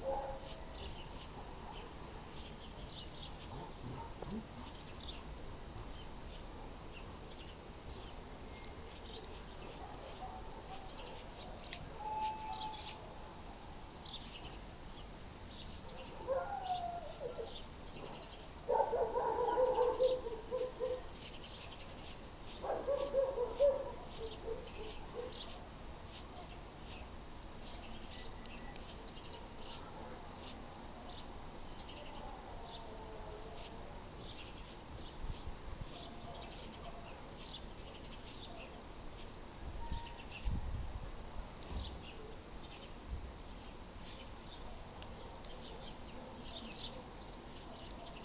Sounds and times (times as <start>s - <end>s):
Insect: 0.1s - 48.2s.